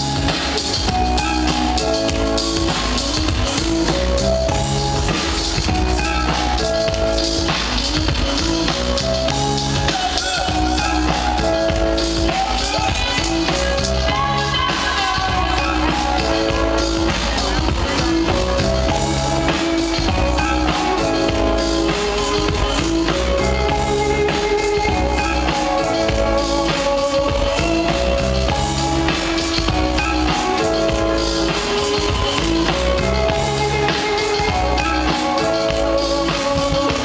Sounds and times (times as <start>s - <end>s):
Trance music: 0.0s - 37.0s.